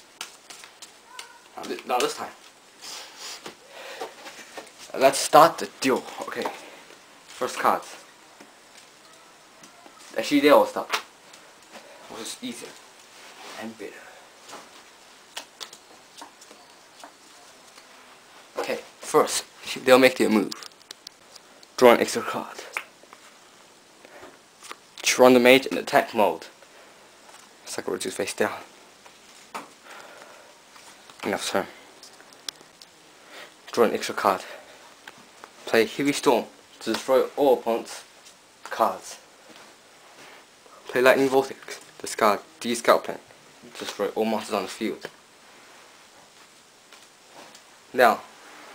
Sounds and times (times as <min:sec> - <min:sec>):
Inside, small room: 0:00.0 - 0:48.7
Speech: 0:09.1 - 0:11.0, 0:21.8 - 0:22.7, 0:40.9 - 0:45.1, 0:47.9 - 0:48.3.